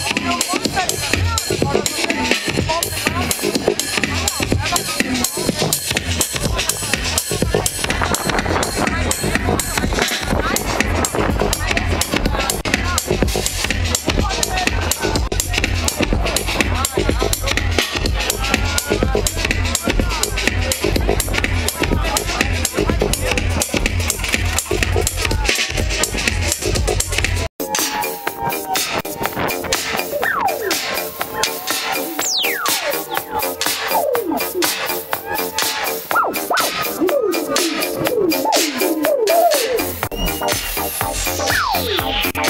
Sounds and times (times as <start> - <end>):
Music: 0.0 - 42.4
Speech: 0.0 - 42.4.